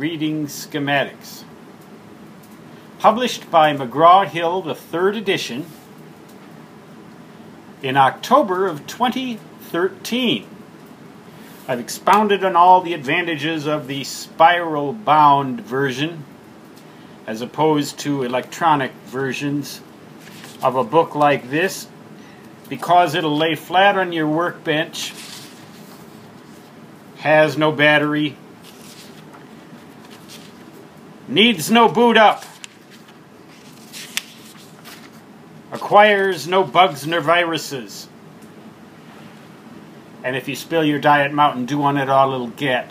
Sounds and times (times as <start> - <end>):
Speech: 0.0 - 1.5, 3.0 - 5.8, 7.8 - 10.5, 11.7 - 16.3, 17.3 - 19.9, 20.6 - 21.9, 22.7 - 25.2, 27.2 - 28.4, 31.3 - 32.5, 35.7 - 38.1, 40.2 - 42.9.